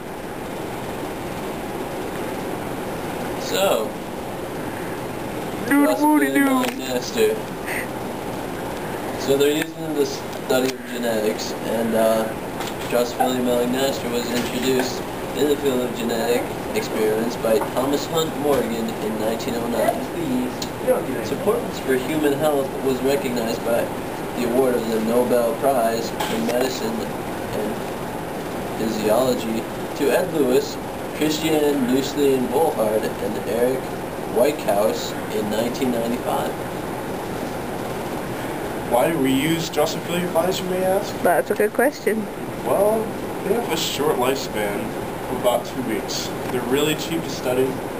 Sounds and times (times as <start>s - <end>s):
Speech: 3.4s - 4.0s, 5.6s - 7.5s, 9.2s - 27.8s, 28.8s - 36.6s, 38.9s - 47.8s.